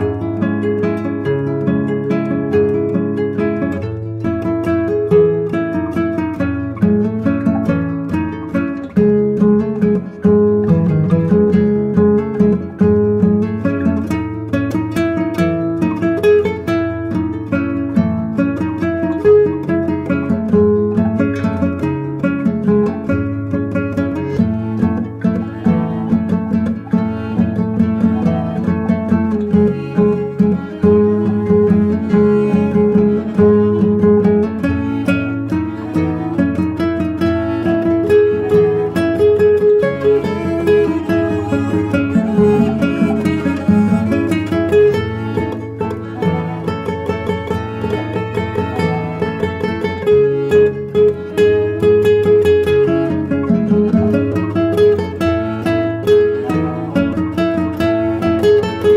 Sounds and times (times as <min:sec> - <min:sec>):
Music: 0:00.0 - 0:58.9.